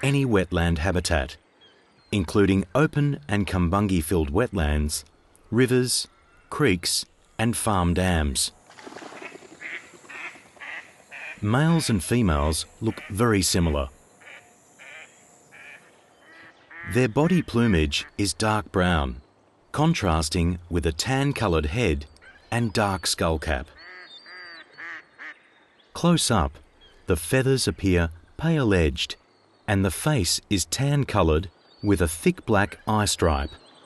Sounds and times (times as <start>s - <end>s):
Speech: 0.0s - 1.4s, 2.1s - 8.5s, 11.4s - 13.9s, 16.9s - 19.2s, 19.8s - 23.8s, 26.0s - 33.6s
Quack: 9.0s - 11.4s, 23.8s - 25.4s.